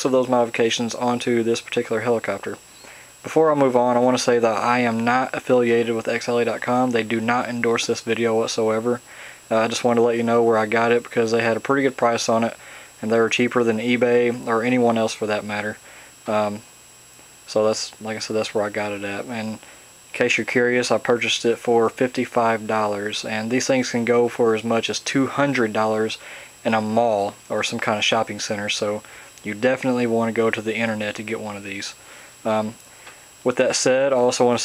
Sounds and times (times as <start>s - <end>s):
Speech: 0.0s - 2.6s, 3.2s - 16.7s, 17.5s - 32.8s, 33.4s - 34.6s.